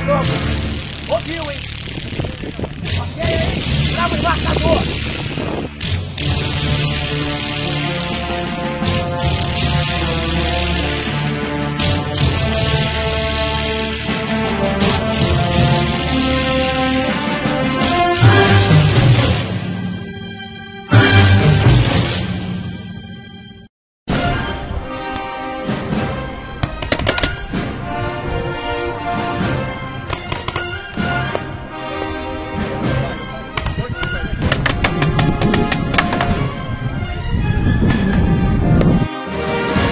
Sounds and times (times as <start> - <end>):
Theme music: 0.0 - 39.9.